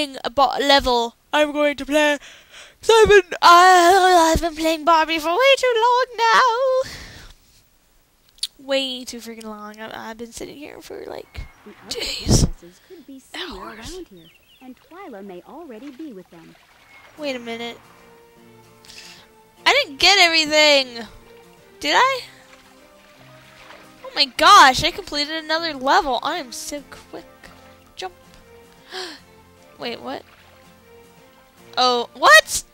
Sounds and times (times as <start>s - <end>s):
Speech: 2.8s - 6.9s, 8.4s - 16.6s, 17.2s - 17.8s, 19.6s - 21.1s, 24.1s - 27.3s, 31.8s - 32.6s
Music: 3.5s - 6.6s, 10.2s - 32.7s.